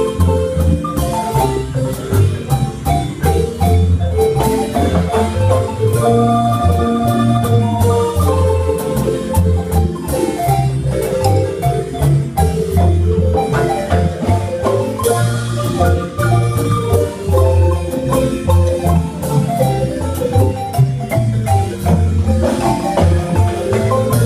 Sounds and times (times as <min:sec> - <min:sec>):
Marimba, xylophone: 0:00.0 - 0:24.2.